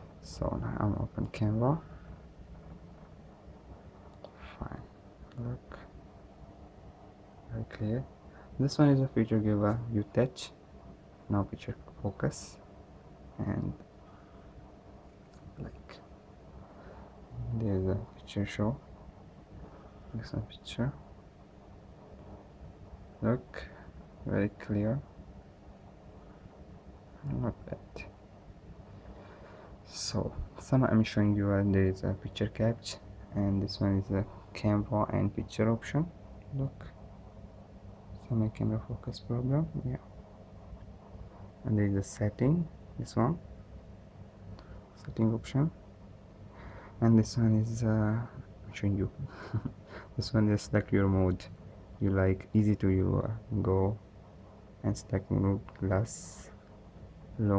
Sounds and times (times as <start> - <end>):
Speech: 0.2 - 1.9, 4.4 - 6.0, 7.5 - 10.6, 11.3 - 12.7, 13.4 - 13.9, 15.6 - 16.1, 17.3 - 18.8, 20.1 - 21.0, 23.2 - 25.1, 27.2 - 28.2, 29.9 - 37.0, 38.2 - 40.1, 41.6 - 43.4, 45.0 - 45.8, 47.0 - 49.3, 50.2 - 54.0, 54.8 - 56.6, 57.4 - 57.5.